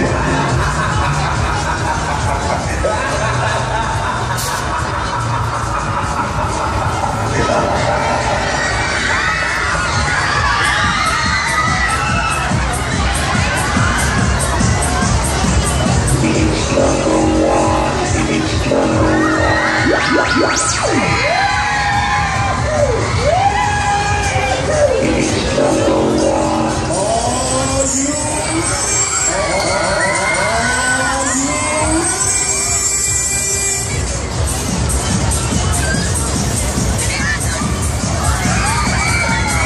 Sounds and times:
Music: 0.0s - 39.6s.

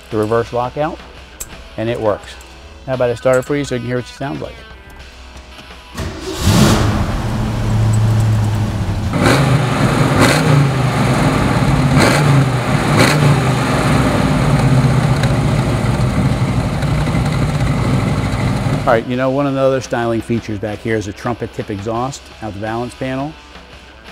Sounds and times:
Music: 0.0s - 7.4s, 18.9s - 24.1s
Speech: 0.1s - 1.0s, 1.8s - 4.6s, 18.9s - 23.4s
Outside, urban or manmade: 4.6s - 20.5s.

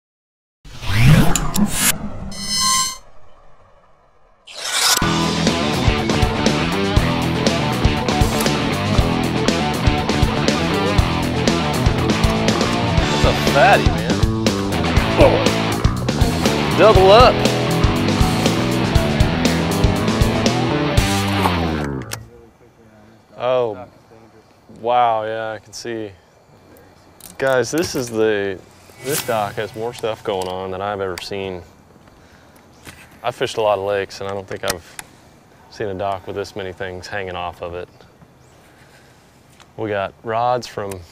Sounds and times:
Music: 5.0s - 22.2s.

